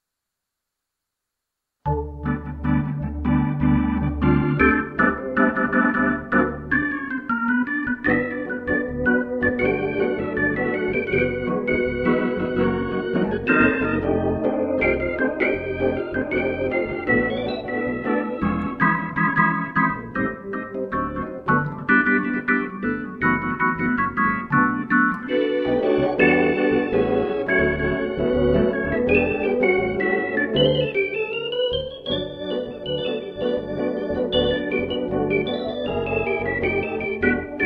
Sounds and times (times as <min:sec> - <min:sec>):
Music: 0:01.9 - 0:37.6.